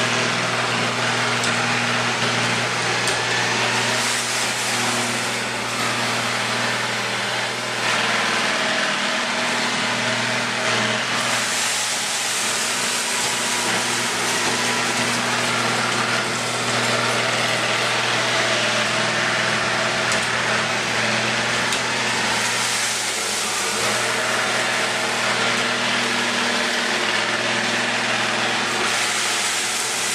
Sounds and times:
Vacuum cleaner: 0:00.0 - 0:30.1.

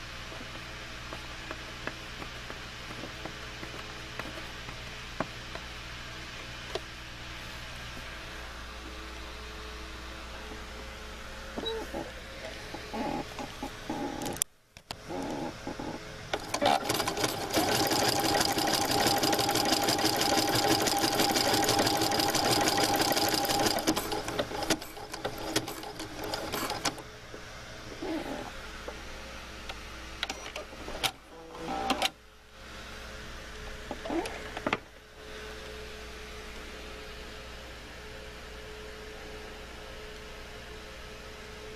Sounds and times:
Sewing machine: 0:16.3 - 0:27.0.

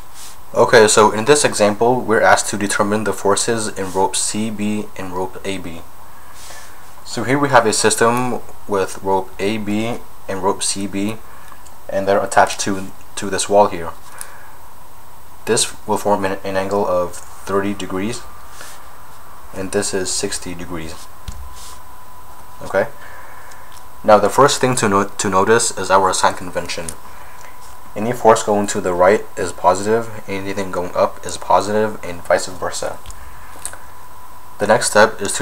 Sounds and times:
Speech: 0:00.5 - 0:05.9, 0:07.0 - 0:11.2, 0:11.9 - 0:14.0, 0:15.4 - 0:18.3, 0:19.5 - 0:21.1, 0:22.6 - 0:23.0, 0:24.0 - 0:27.0, 0:28.0 - 0:33.1, 0:34.6 - 0:35.4.

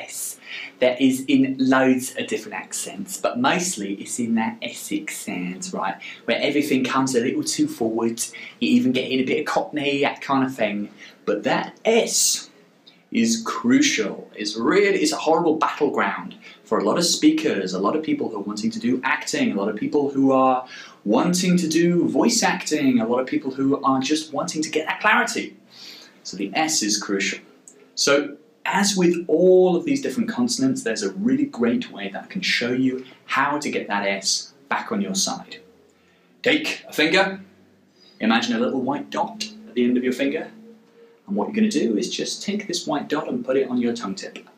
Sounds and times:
Speech: 0:00.0 - 0:25.6, 0:26.2 - 0:35.7, 0:36.4 - 0:37.5, 0:38.2 - 0:40.7, 0:41.3 - 0:44.5.

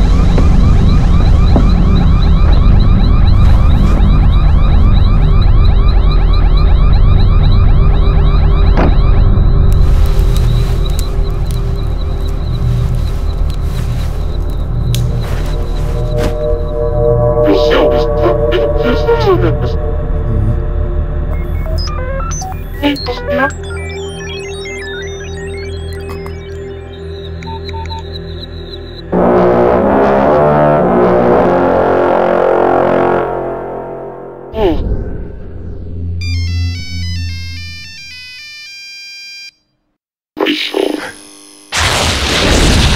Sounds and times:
Music: 0:00.0 - 0:38.5
Ringtone: 0:21.4 - 0:29.0, 0:36.2 - 0:39.6.

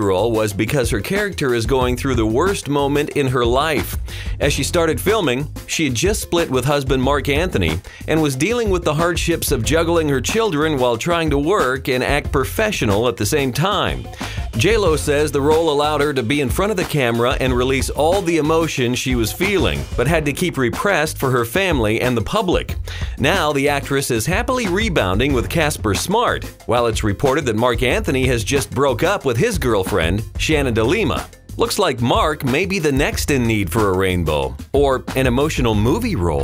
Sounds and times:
Music: 0:00.0 - 0:36.4
Speech: 0:00.0 - 0:36.4.

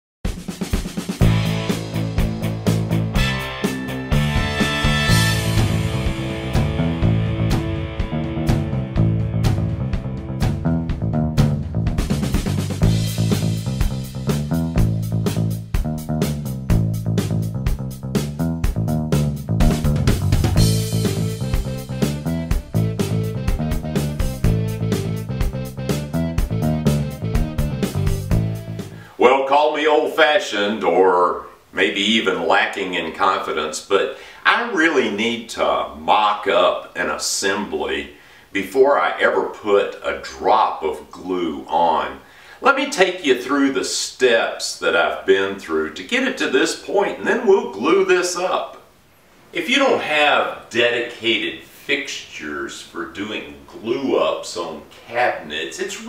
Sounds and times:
Music: 0:00.2 - 0:29.0
Speech: 0:29.2 - 0:48.9, 0:49.5 - 0:56.0.

